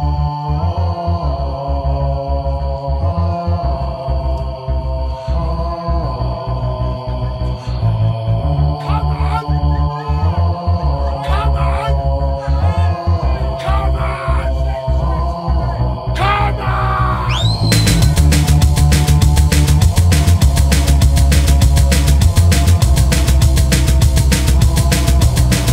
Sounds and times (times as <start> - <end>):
Music: 0.0 - 25.7
Speech: 8.8 - 10.4, 11.2 - 12.0, 13.5 - 14.6, 16.2 - 17.4.